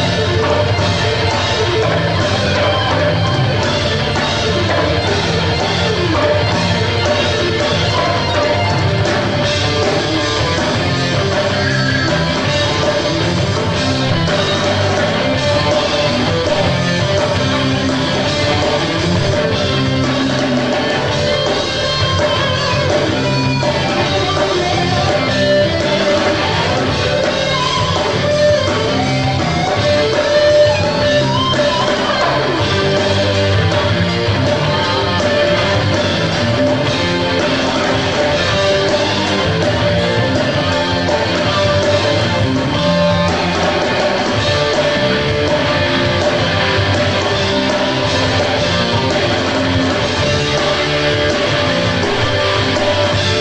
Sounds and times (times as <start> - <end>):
Music: 0.0 - 53.4.